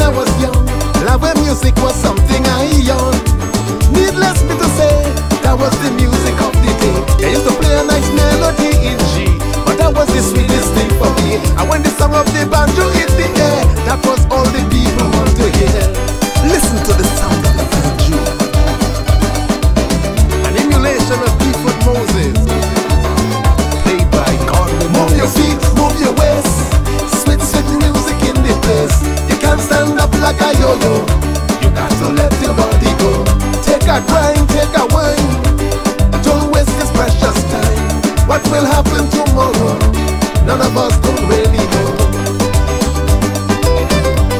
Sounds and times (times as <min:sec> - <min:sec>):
Soundtrack music: 0:00.0 - 0:44.4.